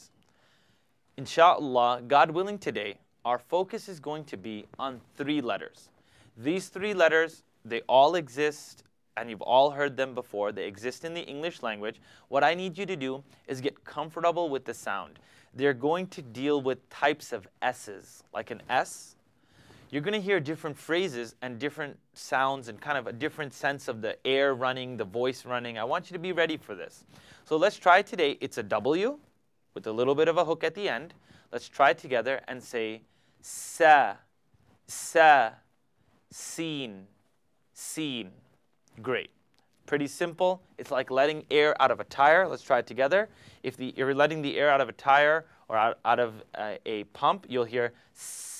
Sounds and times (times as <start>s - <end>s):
Speech: 1.2s - 19.2s, 19.9s - 34.3s, 34.9s - 35.7s, 36.3s - 37.2s, 37.8s - 48.5s.